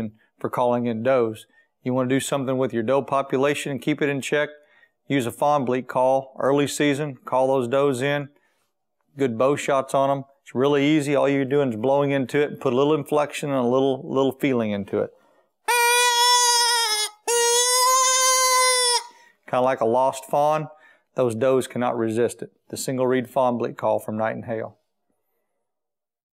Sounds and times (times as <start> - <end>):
Speech: 0.0 - 8.4, 9.2 - 15.2, 19.5 - 24.8.